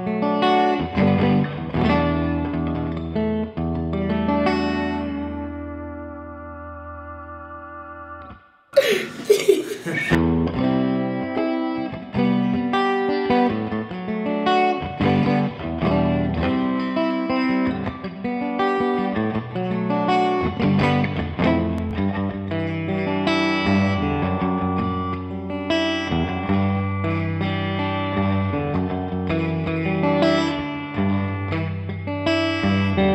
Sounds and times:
Electric guitar: 0:00.0 - 0:33.1.

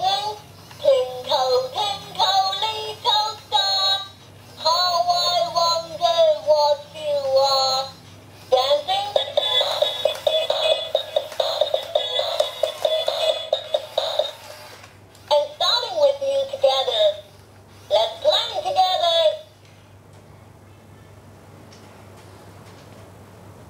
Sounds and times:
Speech: 0:15.3 - 0:17.3, 0:17.9 - 0:19.5.

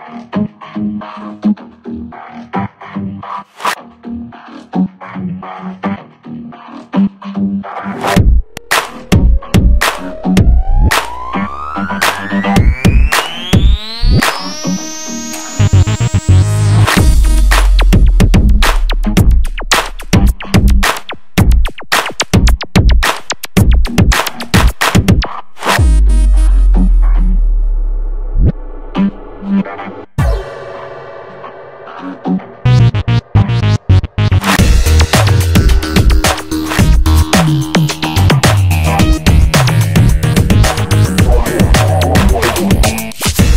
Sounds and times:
Music: 0:00.0 - 0:43.5.

